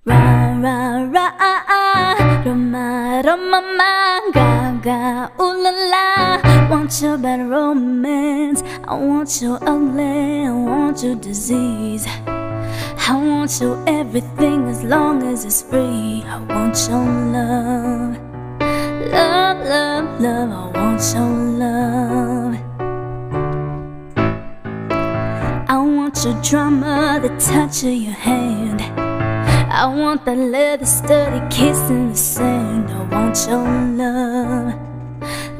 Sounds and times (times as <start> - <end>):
Female singing: 0.0 - 12.2, 13.0 - 18.2, 19.0 - 22.6, 25.7 - 28.9, 29.5 - 34.8
Music: 0.0 - 35.5.